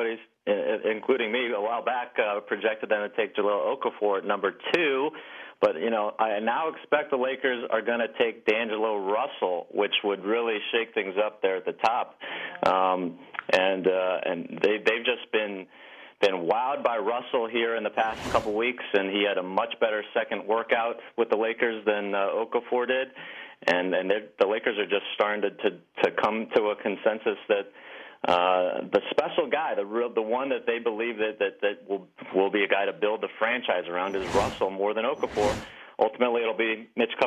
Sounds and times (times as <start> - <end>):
Speech: 0.0 - 37.2.